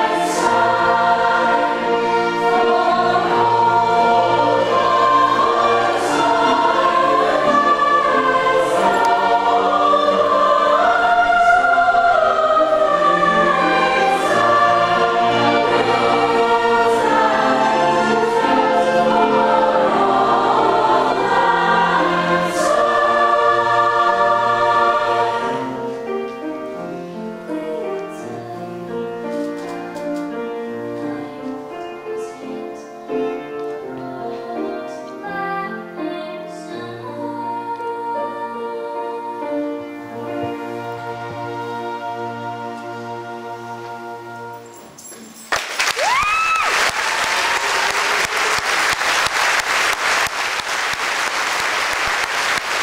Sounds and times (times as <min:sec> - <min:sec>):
Choir: 0:00.0 - 0:45.0
Applause: 0:45.5 - 0:52.8.